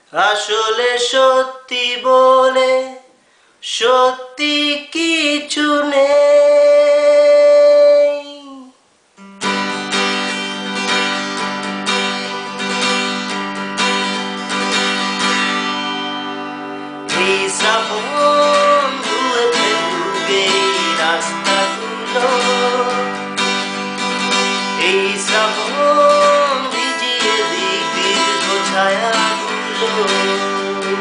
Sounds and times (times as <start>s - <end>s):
Strum: 9.2s - 31.0s.